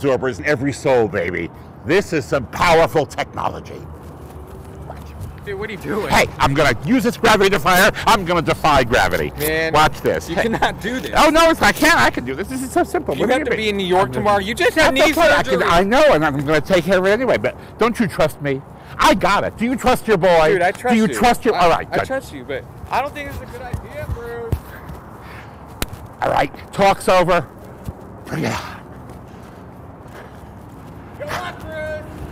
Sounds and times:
Vehicle: 0.0s - 32.3s.

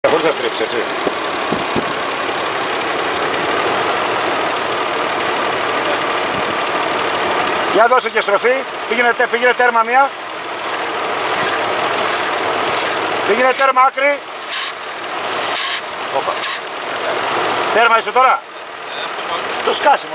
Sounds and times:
Car: 0.0s - 20.1s
Engine: 0.0s - 20.1s
Speech: 7.7s - 10.1s, 13.3s - 14.2s.

